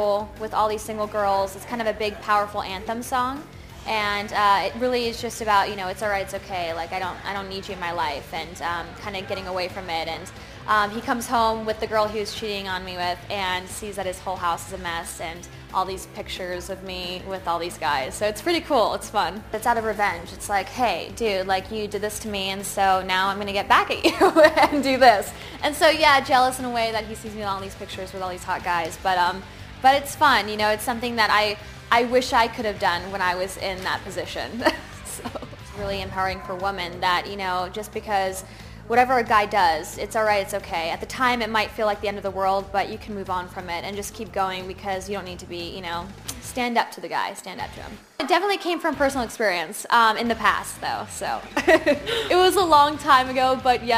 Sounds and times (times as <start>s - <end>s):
Speech: 0.0s - 51.4s, 52.3s - 53.9s
Music: 0.0s - 53.9s.